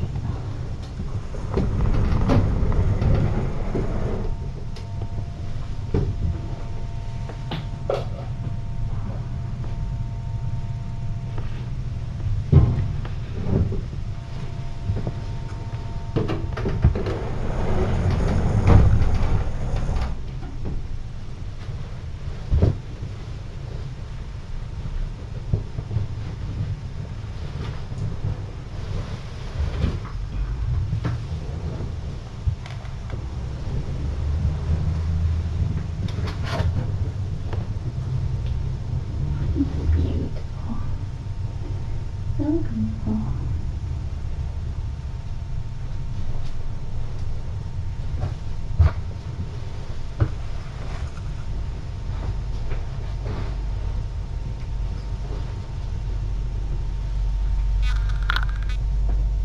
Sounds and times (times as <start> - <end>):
Speech: 39.4 - 41.0, 42.4 - 43.6.